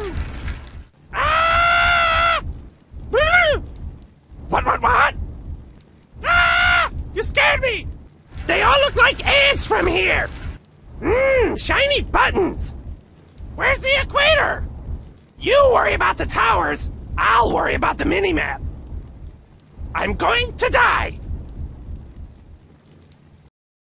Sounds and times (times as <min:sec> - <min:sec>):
Speech: 0:04.5 - 0:05.2, 0:07.2 - 0:07.9, 0:08.5 - 0:10.3, 0:11.0 - 0:12.8, 0:13.6 - 0:14.6, 0:15.4 - 0:18.6, 0:20.0 - 0:21.2.